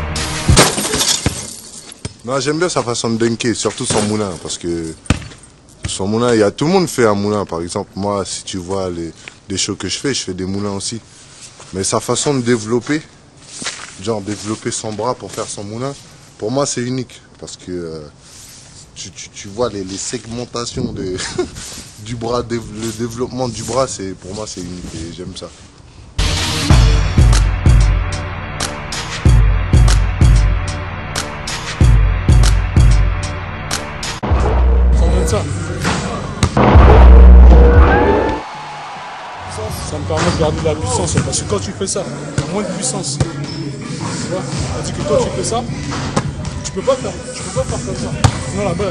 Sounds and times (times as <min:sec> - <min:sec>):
Speech: 0:02.2 - 0:05.0, 0:05.9 - 0:11.0, 0:11.7 - 0:13.1, 0:14.0 - 0:18.2, 0:19.0 - 0:25.6, 0:35.0 - 0:36.4, 0:39.5 - 0:45.8, 0:46.6 - 0:48.9.